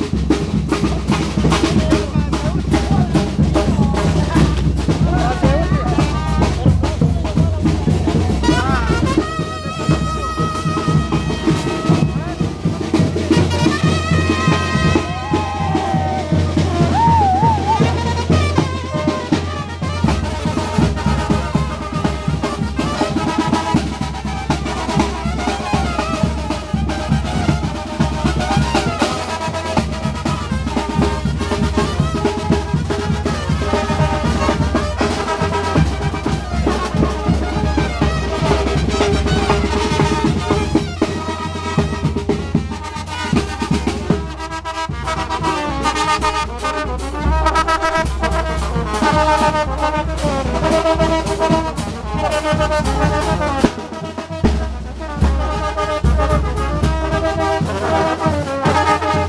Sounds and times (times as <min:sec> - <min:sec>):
Music: 0:00.0 - 0:59.2.